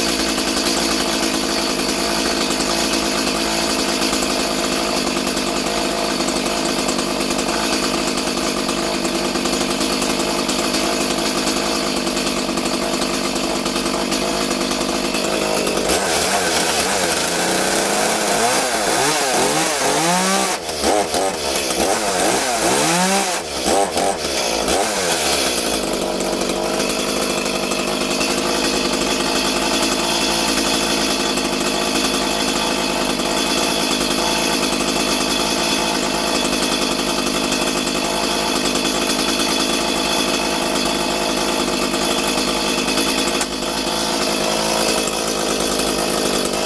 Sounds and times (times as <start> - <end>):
Chainsaw: 0.0 - 46.6.